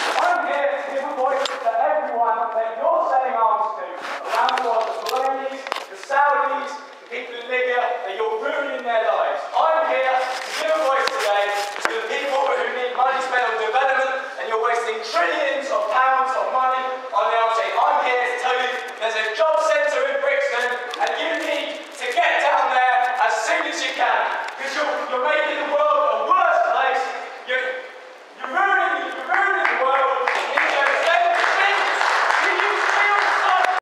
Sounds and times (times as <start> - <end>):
Male speech, man speaking: 0.0 - 33.8
Narration, monologue: 0.0 - 33.8.